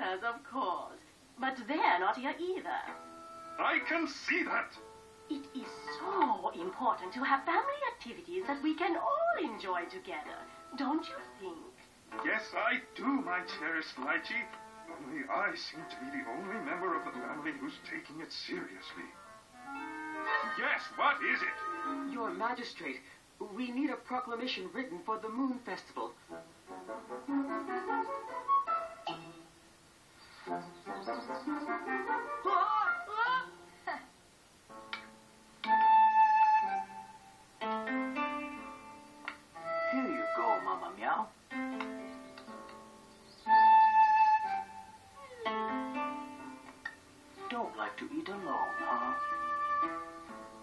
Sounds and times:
Music: 0.0s - 50.6s.

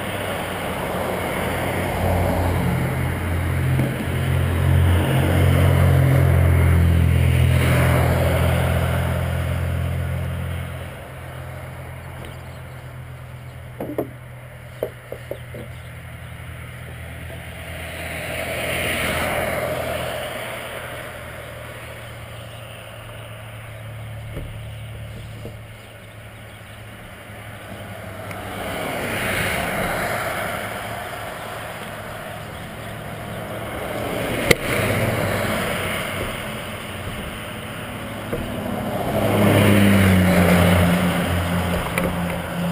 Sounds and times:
Car: 0.0s - 42.7s.

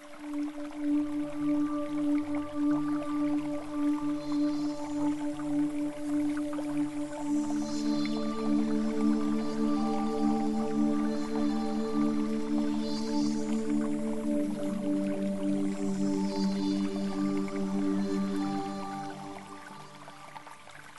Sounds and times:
Music: 0.0s - 20.9s.

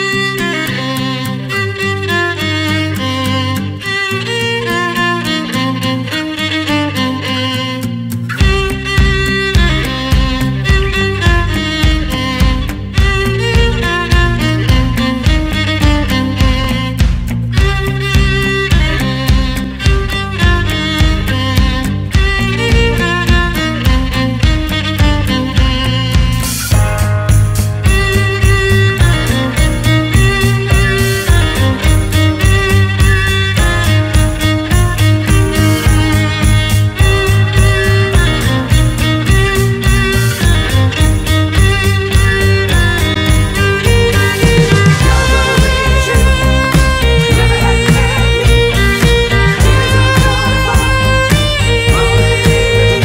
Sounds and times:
Violin, fiddle: 0.0s - 53.0s.

